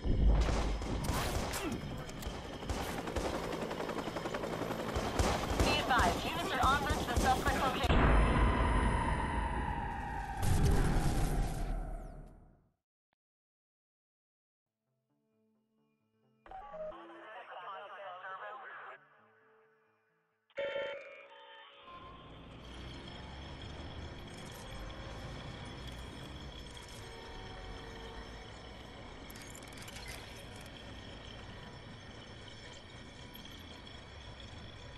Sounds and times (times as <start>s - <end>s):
Speech: 16.5s - 19.0s.